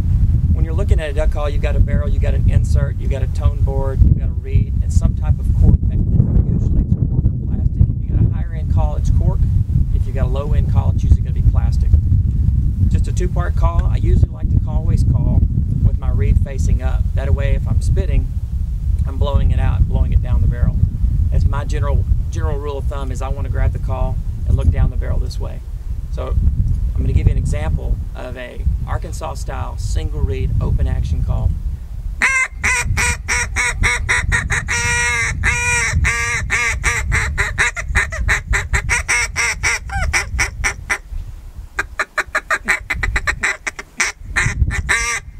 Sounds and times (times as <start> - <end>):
Speech: 0.6 - 9.4, 10.0 - 12.0, 12.9 - 18.2, 19.0 - 25.6, 26.2 - 26.4, 27.0 - 31.5.